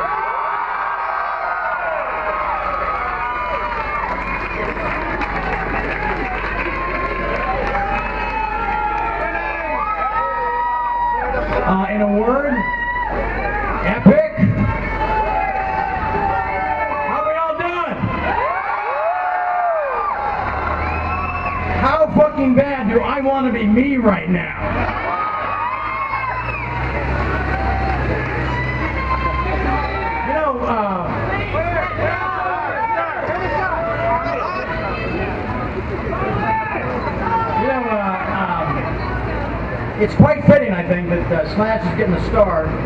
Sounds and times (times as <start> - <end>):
Male speech, man speaking: 11.6 - 12.6, 13.8 - 14.7, 17.1 - 18.1, 21.8 - 24.6, 30.3 - 31.8, 37.6 - 38.9, 40.0 - 42.8.